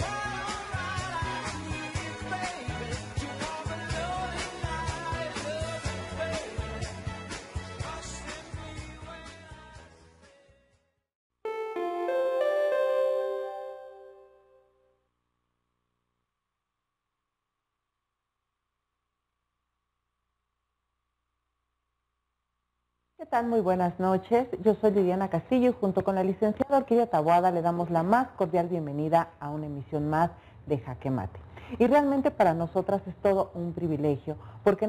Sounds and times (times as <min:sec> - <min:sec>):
Speech: 0:23.2 - 0:34.8.